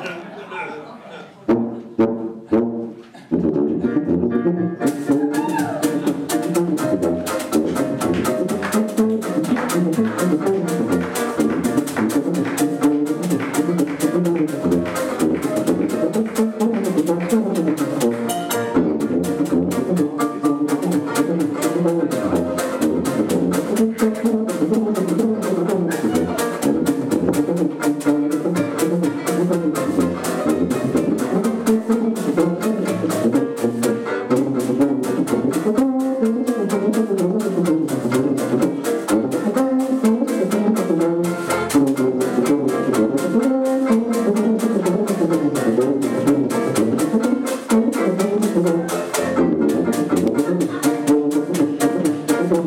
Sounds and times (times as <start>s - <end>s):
Music: 1.4s - 52.6s.